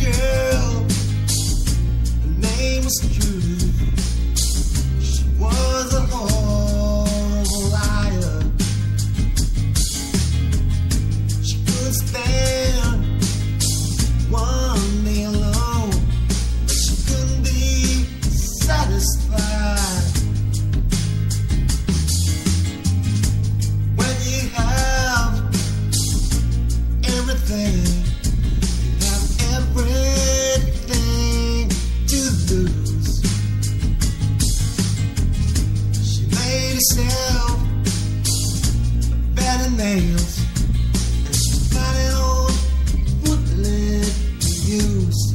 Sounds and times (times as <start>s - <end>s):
Music: 0.0s - 45.3s.